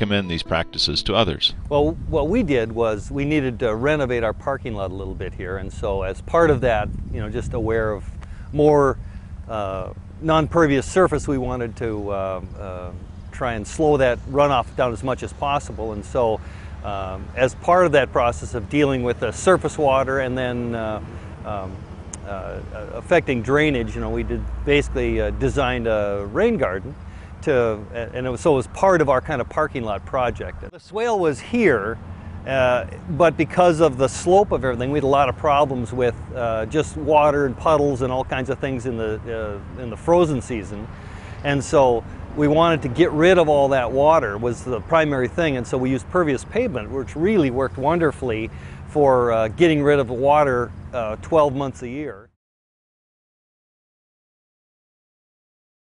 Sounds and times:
Speech: 0:00.0 - 0:52.4.

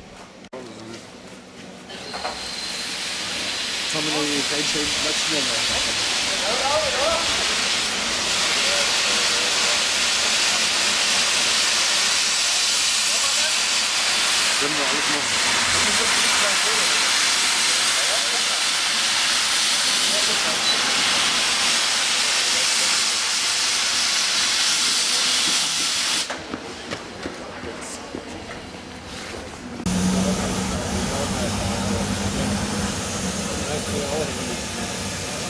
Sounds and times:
Railroad car, train wagon: 0:00.0 - 0:35.4
Train: 0:00.0 - 0:35.4.

